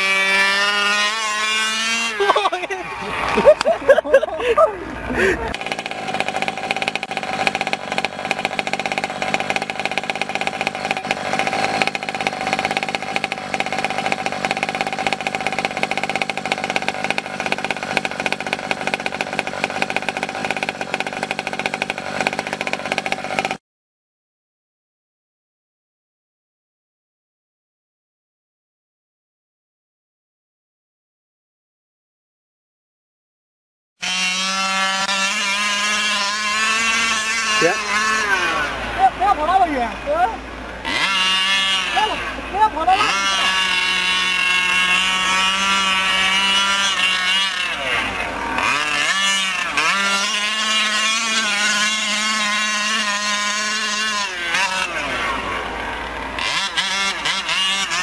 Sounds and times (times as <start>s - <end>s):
Chainsaw: 0.0s - 23.6s, 34.0s - 58.0s
Vehicle: 0.0s - 23.6s, 34.0s - 58.0s.